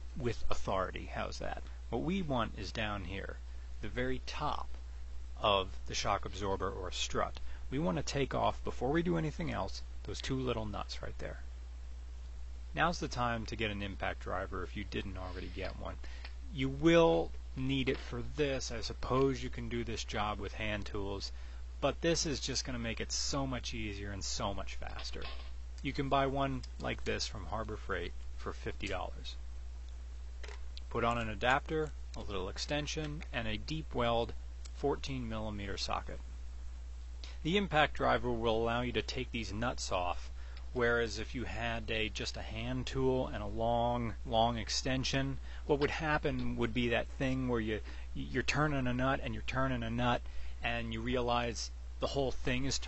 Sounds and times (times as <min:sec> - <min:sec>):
Speech: 0:00.2 - 0:04.8, 0:05.4 - 0:11.5, 0:12.8 - 0:29.4, 0:30.8 - 0:36.2, 0:37.3 - 0:52.8.